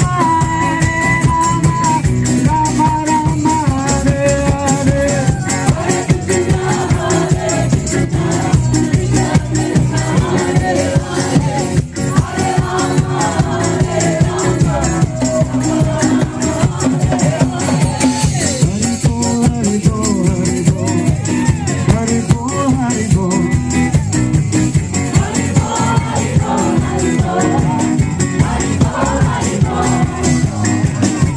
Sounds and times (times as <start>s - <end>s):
Music: 0.0s - 31.3s.